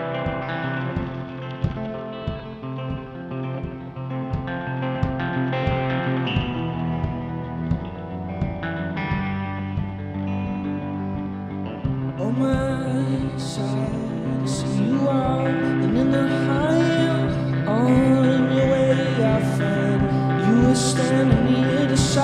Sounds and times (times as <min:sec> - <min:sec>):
Music: 0:00.0 - 0:22.2.